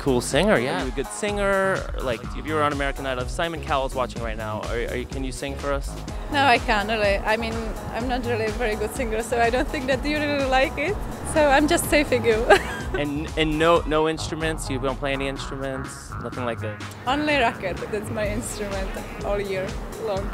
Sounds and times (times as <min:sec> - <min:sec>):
Speech: 0:00.0 - 0:20.3.